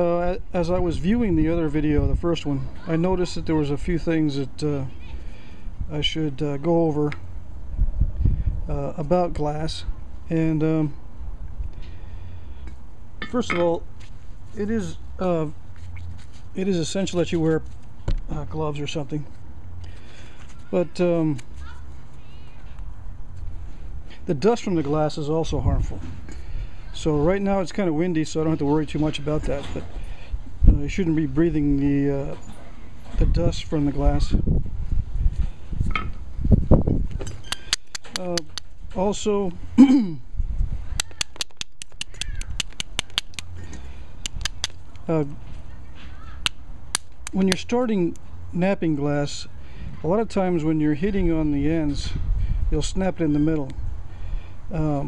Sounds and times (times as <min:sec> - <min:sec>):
Speech: 0:00.0 - 0:04.9, 0:05.9 - 0:07.2, 0:08.7 - 0:11.0, 0:14.6 - 0:15.6, 0:16.6 - 0:17.6, 0:18.3 - 0:19.3, 0:20.6 - 0:21.8, 0:24.3 - 0:26.1, 0:27.0 - 0:29.9, 0:30.7 - 0:32.4, 0:33.2 - 0:34.4, 0:38.2 - 0:40.2, 0:45.1 - 0:45.4, 0:47.4 - 0:52.2, 0:52.8 - 0:53.8, 0:54.7 - 0:55.0.